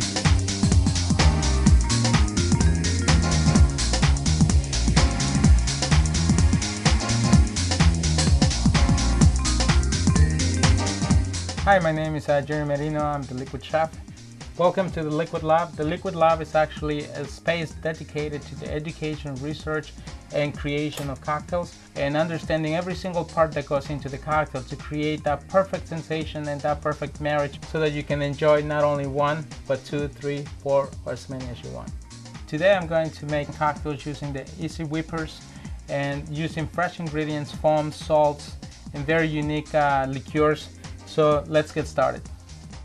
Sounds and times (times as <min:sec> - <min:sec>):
Music: 0:00.0 - 0:42.8
Speech: 0:11.6 - 0:14.0, 0:14.6 - 0:31.9, 0:32.5 - 0:42.2.